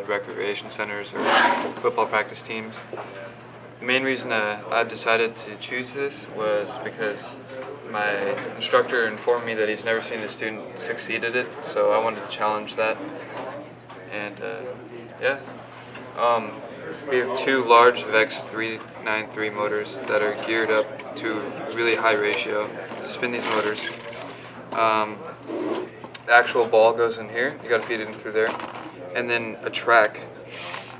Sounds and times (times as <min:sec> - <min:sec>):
Speech: 0:00.0 - 0:15.5, 0:16.1 - 0:25.4, 0:26.0 - 0:30.5.